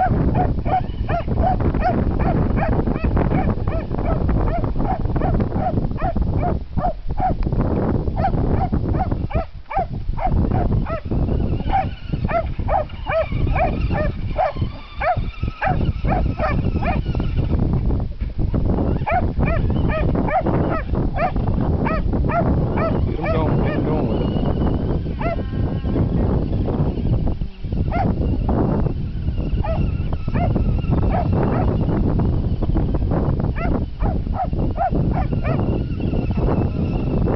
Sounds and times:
Bow-wow: 0:08.2 - 0:11.0, 0:19.1 - 0:23.9
Yip: 0:19.0 - 0:23.8, 0:29.6 - 0:31.7.

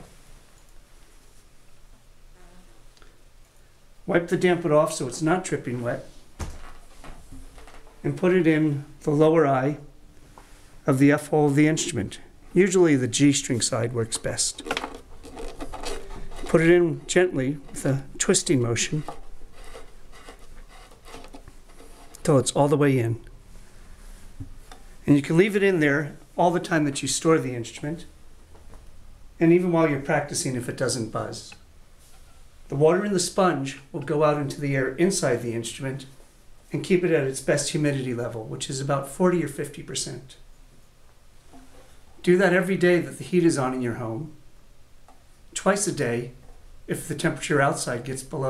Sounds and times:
Speech: 0:04.1 - 0:06.2, 0:08.0 - 0:09.9, 0:10.8 - 0:14.8, 0:16.5 - 0:19.2, 0:22.2 - 0:23.3, 0:25.0 - 0:28.1, 0:29.4 - 0:31.6, 0:32.7 - 0:40.4, 0:42.2 - 0:44.4, 0:45.6 - 0:48.4.

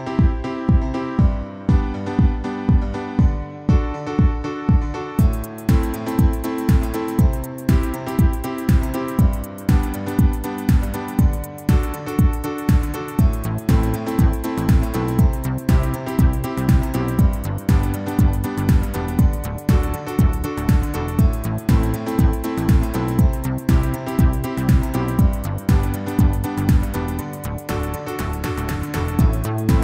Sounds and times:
Music: 0:00.0 - 0:29.8.

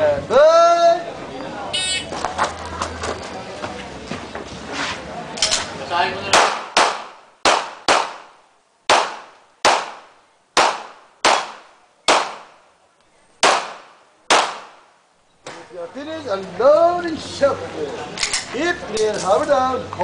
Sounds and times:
Outside, rural or natural: 0:00.0 - 0:20.0.

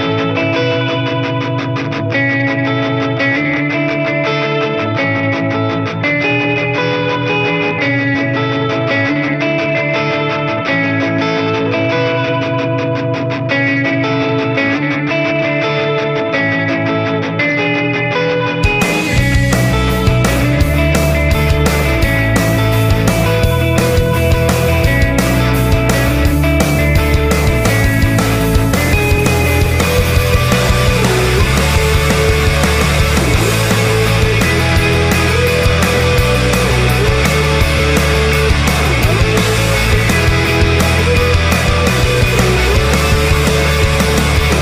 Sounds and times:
Music: 0:00.0 - 0:44.6.

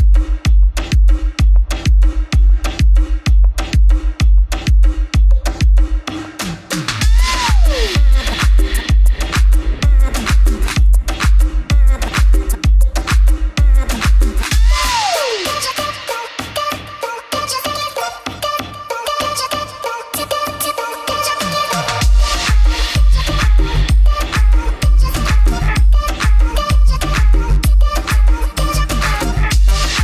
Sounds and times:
Disco: 0:00.0 - 0:30.0.

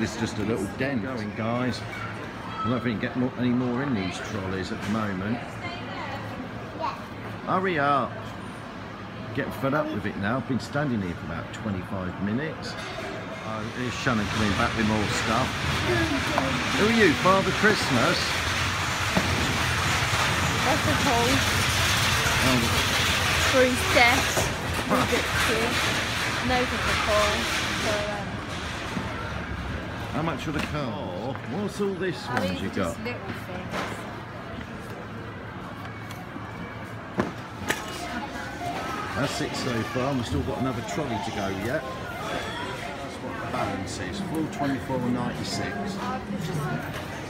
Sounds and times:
Inside, public space: 0:00.0 - 0:47.3.

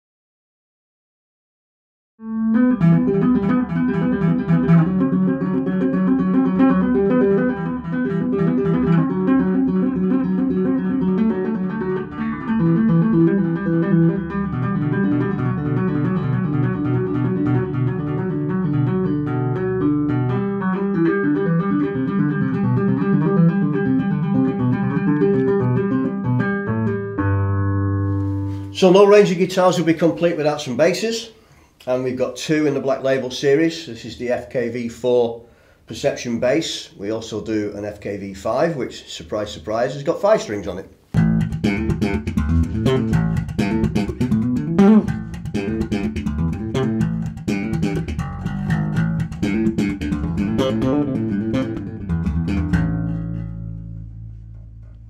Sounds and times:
Guitar: 0:02.2 - 0:33.6, 0:34.2 - 0:55.0.

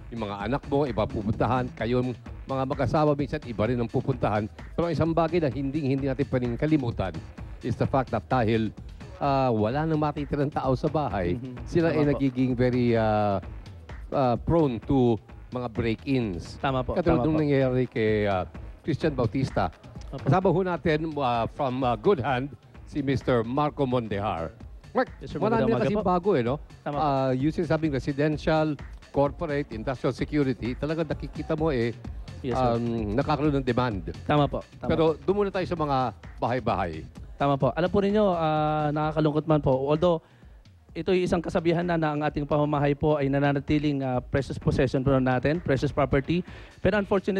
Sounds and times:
Speech: 0:00.0 - 0:13.4, 0:14.1 - 0:40.2, 0:40.9 - 0:47.3
Music: 0:00.0 - 0:47.3.

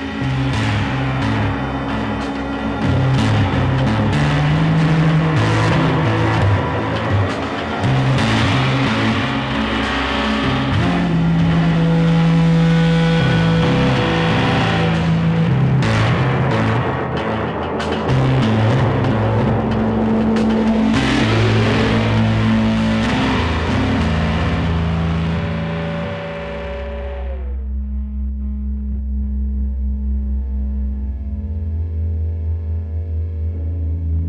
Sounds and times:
Music: 0:00.0 - 0:34.2.

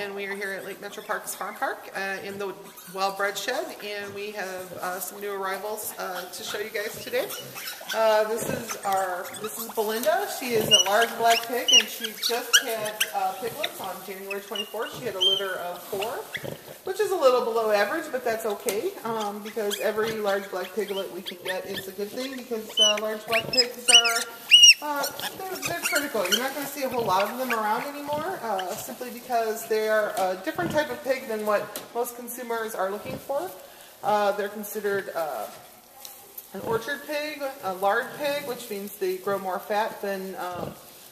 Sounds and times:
Oink: 0:00.0 - 0:31.8, 0:32.4 - 0:33.5, 0:36.6 - 0:38.6, 0:39.9 - 0:40.9
Speech: 0:00.0 - 0:35.6, 0:36.5 - 0:40.8.

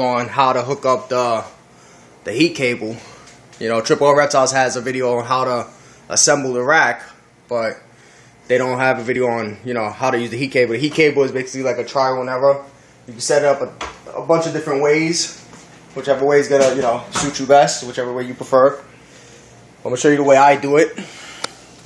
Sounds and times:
Speech: 0:00.0 - 0:01.6, 0:02.2 - 0:07.8, 0:08.5 - 0:15.4, 0:16.0 - 0:18.9, 0:19.8 - 0:21.0.

